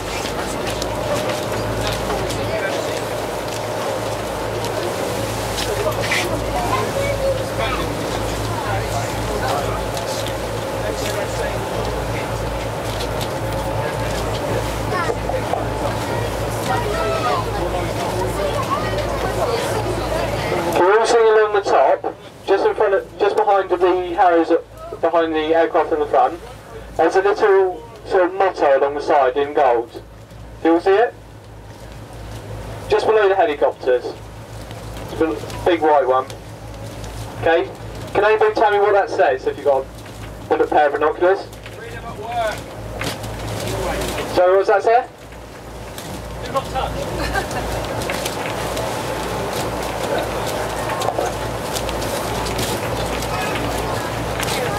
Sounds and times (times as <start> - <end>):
Sailboat, sailing ship: 0.0 - 54.7
Speech: 13.7 - 30.0, 32.9 - 34.2, 37.4 - 39.9, 40.5 - 42.6.